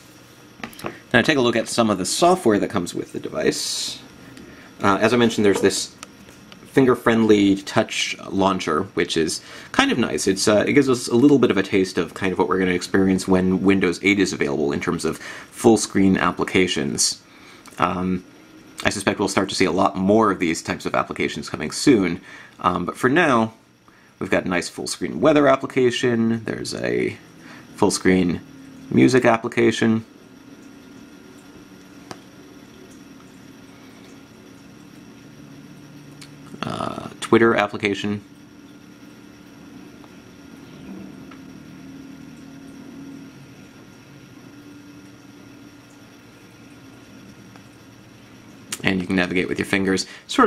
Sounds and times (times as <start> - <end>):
Inside, small room: 0.0 - 50.4
Speech: 1.1 - 4.1, 4.8 - 6.0, 6.7 - 18.2, 18.8 - 23.6, 24.2 - 27.2, 27.8 - 30.1, 36.5 - 38.3, 48.8 - 50.4.